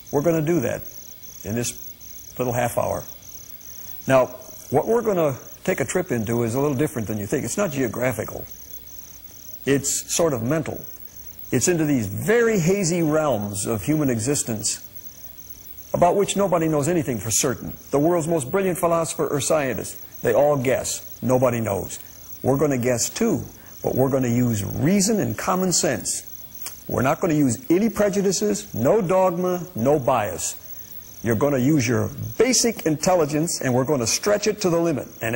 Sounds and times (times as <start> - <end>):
Speech: 0.1 - 1.8, 2.4 - 3.1, 4.1 - 8.5, 9.7 - 10.9, 11.5 - 14.8, 16.0 - 26.3, 26.9 - 30.6, 31.2 - 35.3.